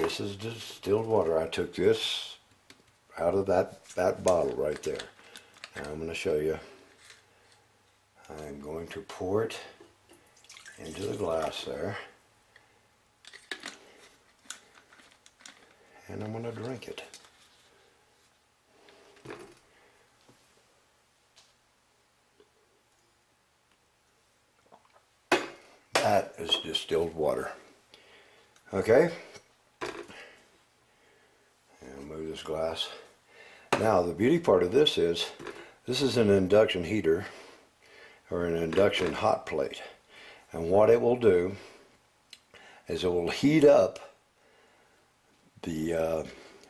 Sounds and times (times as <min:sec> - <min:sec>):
Speech: 0:00.0 - 0:02.5, 0:03.1 - 0:05.1, 0:05.7 - 0:06.8, 0:08.2 - 0:09.8, 0:10.8 - 0:12.2, 0:16.0 - 0:17.2, 0:26.0 - 0:27.7, 0:28.7 - 0:29.4, 0:31.8 - 0:33.1, 0:33.8 - 0:37.4, 0:38.3 - 0:41.7, 0:42.9 - 0:44.2, 0:45.6 - 0:46.4
Liquid: 0:10.1 - 0:11.5.